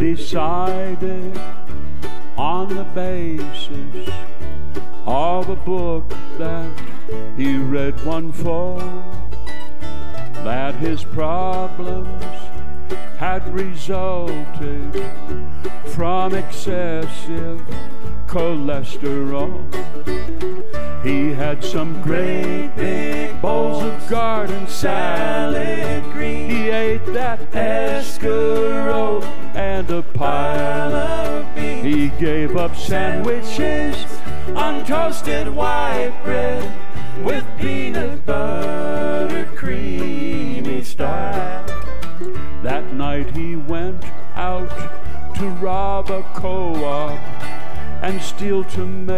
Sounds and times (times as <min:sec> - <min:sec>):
Bluegrass: 0:00.0 - 0:49.1
Singing: 0:21.0 - 0:41.8.